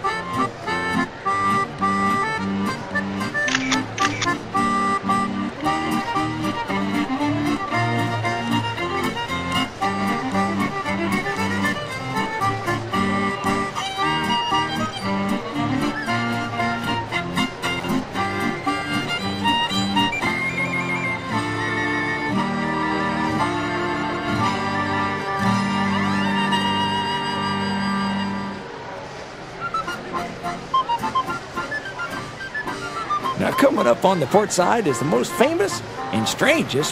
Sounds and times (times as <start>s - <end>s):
Music: 0.0s - 28.8s, 29.6s - 36.9s.